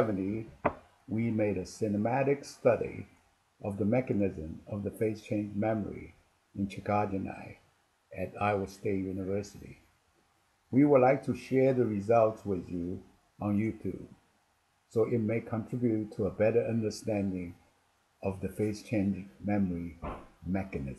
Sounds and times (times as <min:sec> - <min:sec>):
Speech: 0:00.0 - 0:00.5, 0:01.1 - 0:07.6, 0:08.2 - 0:09.8, 0:10.8 - 0:14.1, 0:15.0 - 0:17.6, 0:18.2 - 0:20.9.